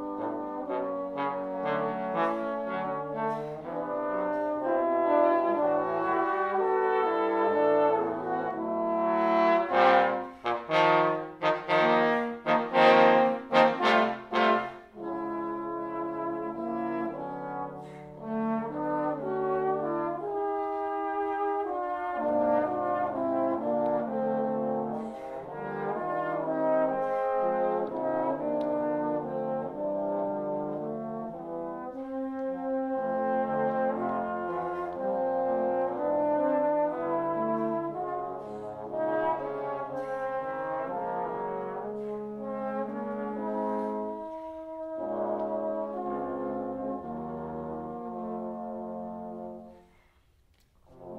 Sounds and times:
Trombone: 0.0s - 50.0s, 50.9s - 51.1s
Trumpet: 0.0s - 51.1s.

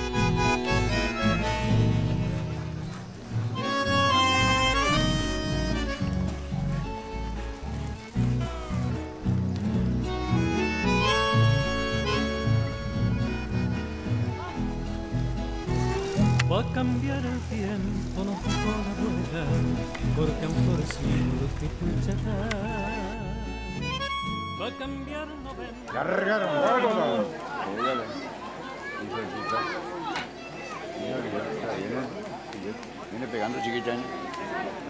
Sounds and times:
Music: 0.0s - 25.9s.

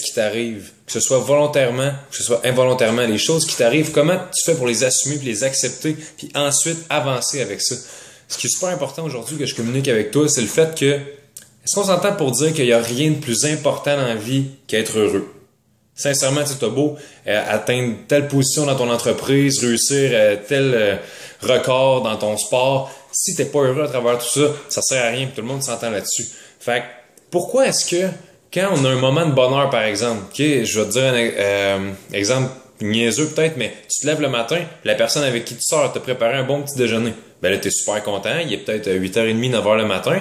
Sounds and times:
Speech: 0.0s - 40.2s.

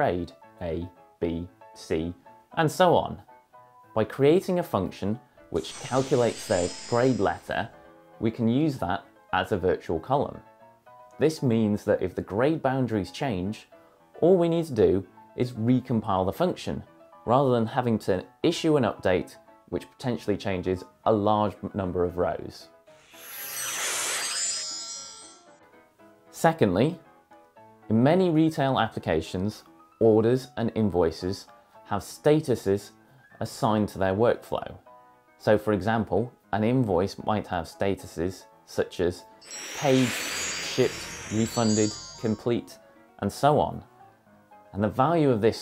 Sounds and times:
Speech: 0.0s - 3.3s, 4.0s - 10.4s, 11.2s - 22.7s, 26.4s - 27.0s, 27.9s - 34.8s, 35.4s - 39.2s, 40.8s - 43.9s, 44.7s - 45.6s
Music: 0.0s - 45.6s.

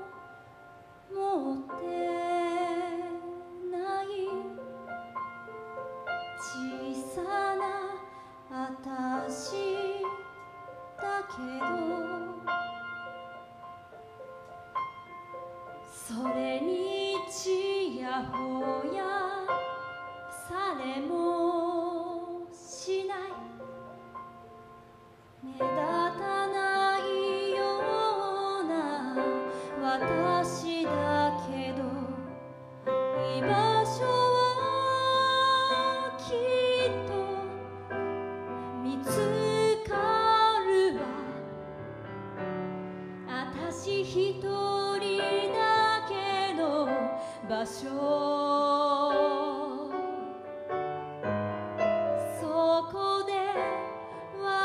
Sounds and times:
Music: 0.0s - 54.6s.

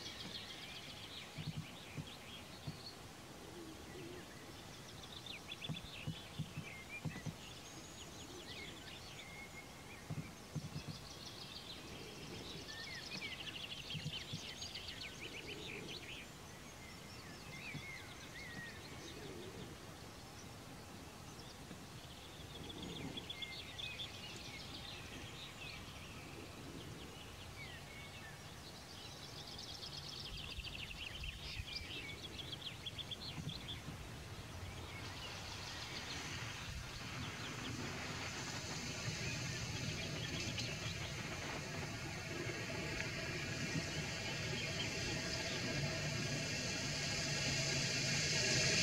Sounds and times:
Environmental noise: 0.0s - 48.8s.

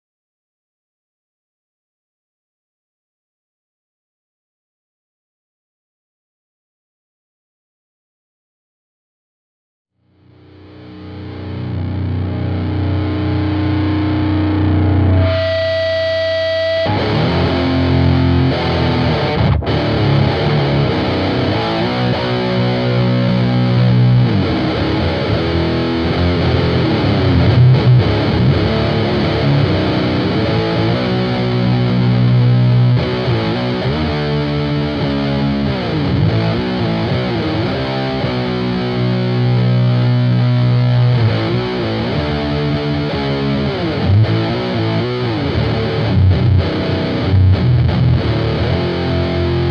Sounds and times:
Music: 10.0s - 49.7s.

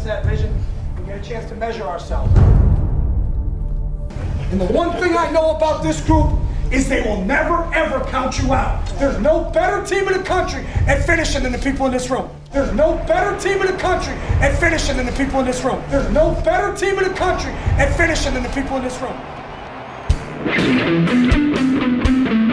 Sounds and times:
Speech: 0.0s - 2.5s, 4.5s - 19.2s
Music: 0.0s - 22.5s.

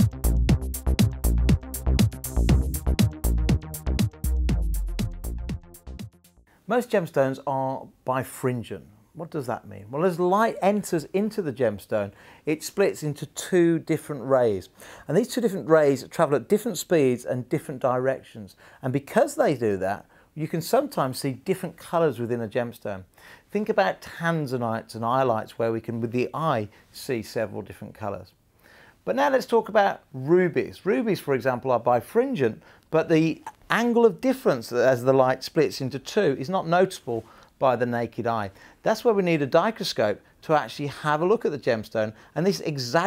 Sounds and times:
Speech: 6.7s - 28.4s, 29.0s - 43.0s.

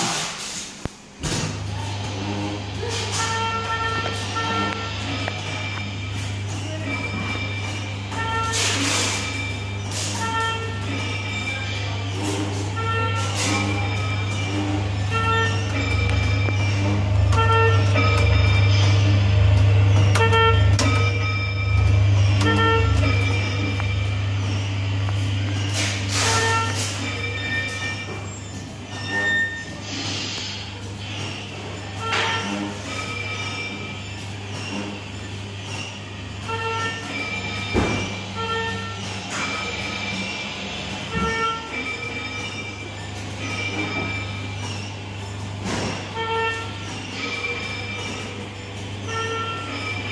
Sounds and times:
Vehicle: 0.0s - 50.1s.

